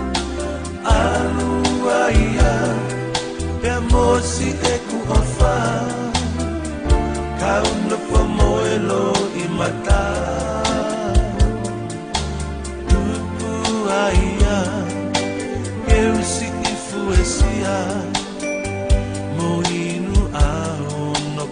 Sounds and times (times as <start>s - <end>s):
Soul music: 0.0s - 21.5s.